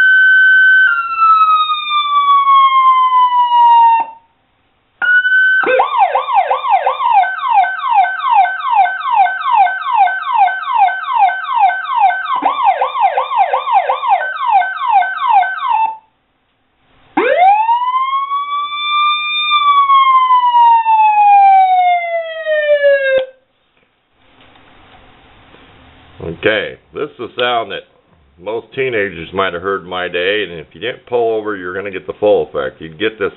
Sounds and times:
Ambulance (siren): 0:00.0 - 0:04.3, 0:05.0 - 0:16.1, 0:17.2 - 0:23.4
Police car (siren): 0:00.0 - 0:04.3, 0:05.0 - 0:16.1, 0:17.2 - 0:23.4.

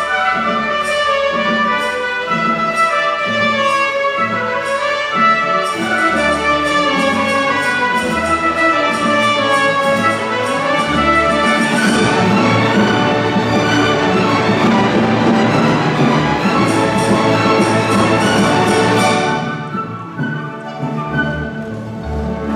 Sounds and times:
Cello: 0:00.0 - 0:22.5.

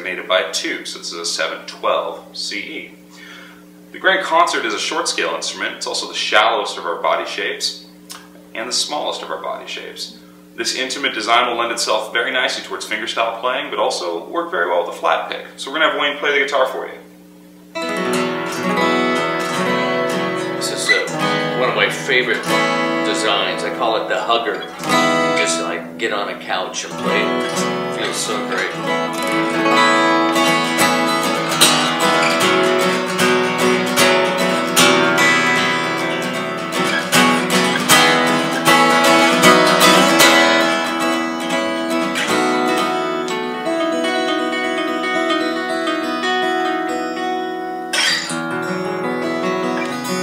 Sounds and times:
Speech: 0:00.0 - 0:03.0, 0:03.9 - 0:07.9, 0:08.6 - 0:17.1, 0:20.6 - 0:24.7, 0:25.4 - 0:28.8
Acoustic guitar: 0:17.7 - 0:50.2
Strum: 0:17.8 - 0:50.2.

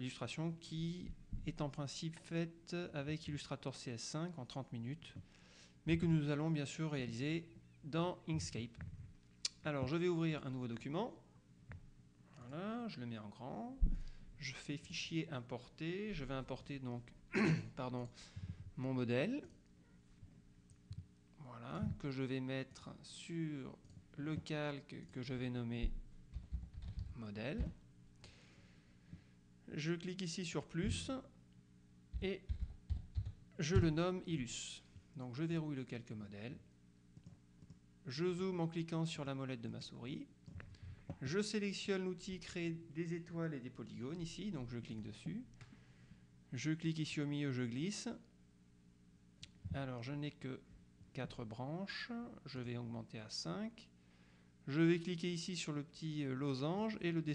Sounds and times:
Speech: 0:00.0 - 0:05.2, 0:05.9 - 0:08.8, 0:09.5 - 0:11.3, 0:12.3 - 0:18.2, 0:18.8 - 0:19.6, 0:21.4 - 0:26.0, 0:27.1 - 0:27.8, 0:29.7 - 0:31.4, 0:32.2 - 0:32.5, 0:33.6 - 0:36.7, 0:38.0 - 0:40.4, 0:41.2 - 0:45.6, 0:46.5 - 0:48.3, 0:49.6 - 0:53.9, 0:54.6 - 0:57.3.

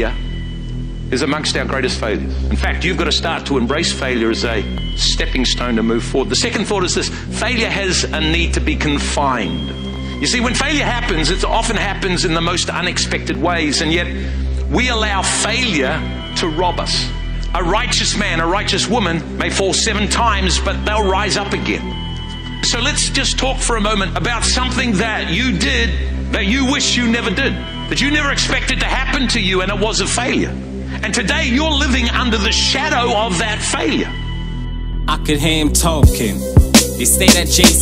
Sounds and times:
Speech: 0:00.0 - 0:00.2, 0:01.1 - 0:21.9, 0:22.6 - 0:34.2, 0:35.1 - 0:36.4, 0:37.0 - 0:37.8
Music: 0:00.0 - 0:37.8.

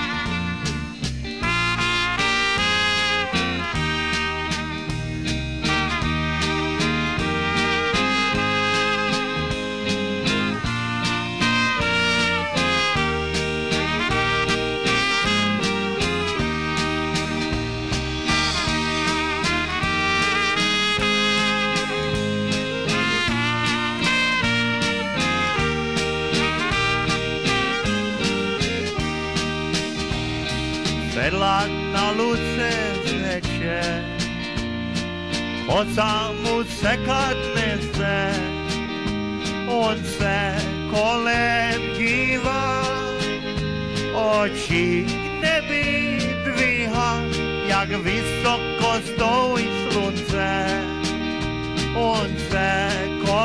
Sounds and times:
Music: 0:00.0 - 0:53.4.

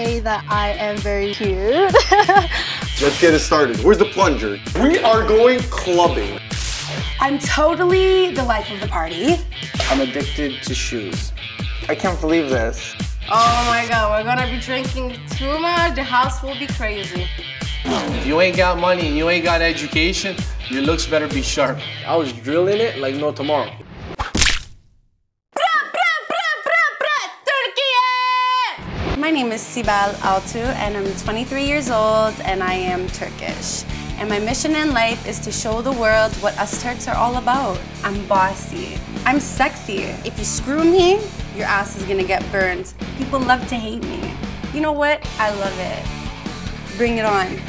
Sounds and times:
Music: 0:00.0 - 0:23.9, 0:28.8 - 0:47.6.

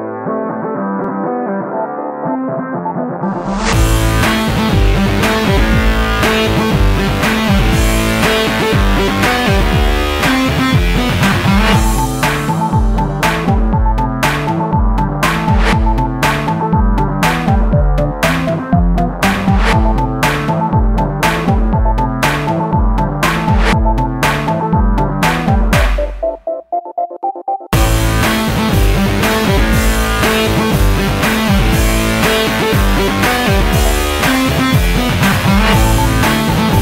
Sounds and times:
Soundtrack music: 0:00.0 - 0:36.8.

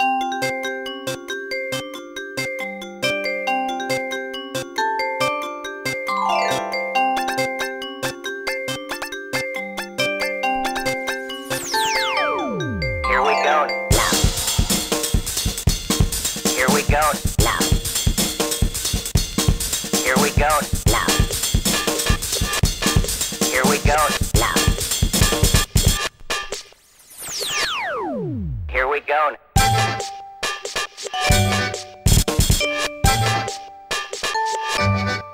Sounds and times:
Music: 0:00.0 - 0:28.7, 0:29.6 - 0:35.3
Speech: 0:13.1 - 0:13.8, 0:16.5 - 0:17.7, 0:20.0 - 0:21.2, 0:23.5 - 0:24.6, 0:28.7 - 0:29.4.

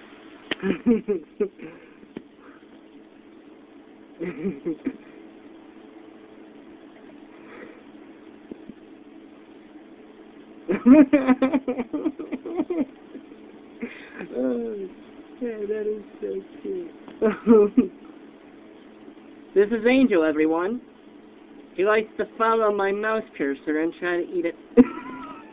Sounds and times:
Speech: 0:14.3 - 0:17.0, 0:19.6 - 0:20.8, 0:21.8 - 0:24.6.

